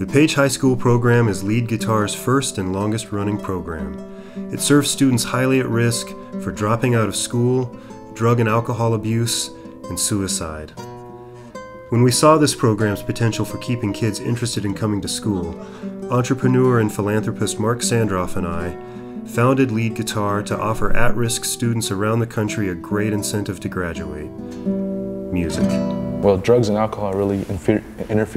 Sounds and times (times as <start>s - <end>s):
Speech: 0.0s - 10.7s, 11.9s - 24.3s, 25.3s - 28.3s
Strum: 0.0s - 27.6s.